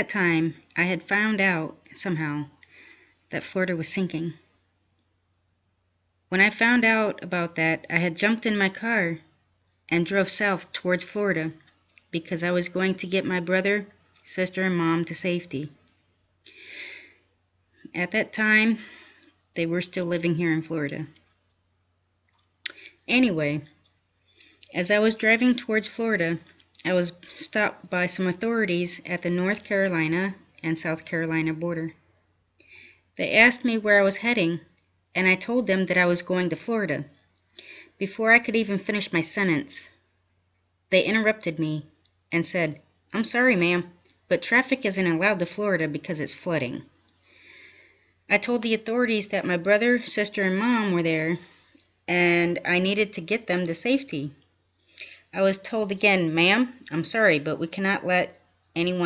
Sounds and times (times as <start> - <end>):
Speech: 0.0 - 2.6, 3.3 - 4.5, 6.3 - 9.3, 9.9 - 15.8, 17.9 - 18.9, 19.6 - 21.2, 22.7 - 23.8, 24.7 - 32.0, 33.2 - 37.2, 38.0 - 40.0, 40.9 - 46.9, 48.3 - 51.5, 52.1 - 54.4, 55.4 - 59.0.